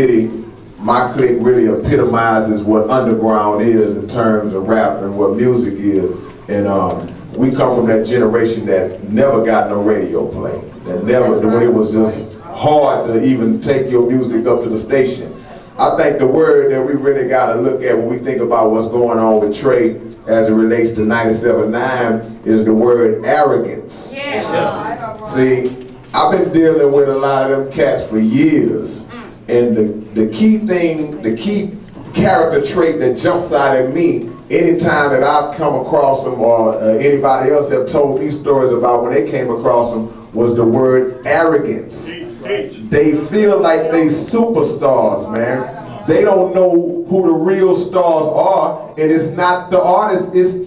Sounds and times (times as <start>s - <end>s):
Speech: 0.0s - 50.6s.